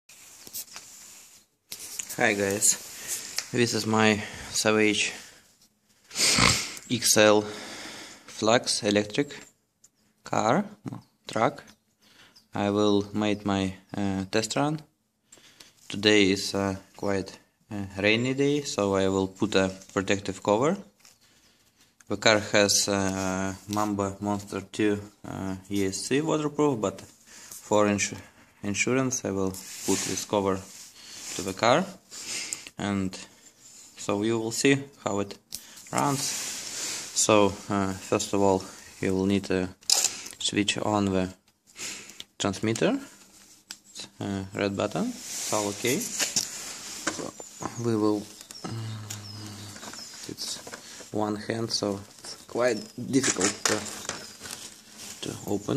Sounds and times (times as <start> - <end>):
Speech: 2.1 - 2.8, 3.5 - 5.2, 6.9 - 7.6, 8.4 - 9.4, 10.2 - 11.7, 12.5 - 14.9, 15.9 - 20.9, 22.1 - 30.7, 31.4 - 32.0, 32.8 - 33.3, 34.0 - 36.3, 37.2 - 39.8, 40.4 - 41.4, 42.4 - 43.1, 44.0 - 46.2, 47.6 - 49.4, 50.3 - 54.0, 55.2 - 55.7.